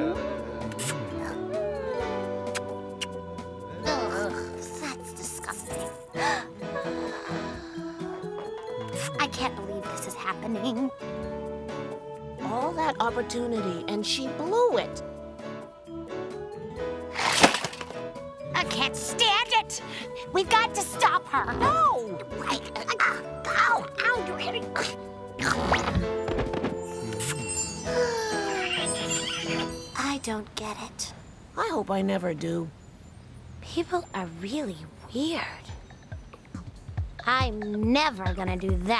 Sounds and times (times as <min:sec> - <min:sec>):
Music: 0:00.0 - 0:30.4, 0:33.7 - 0:38.9.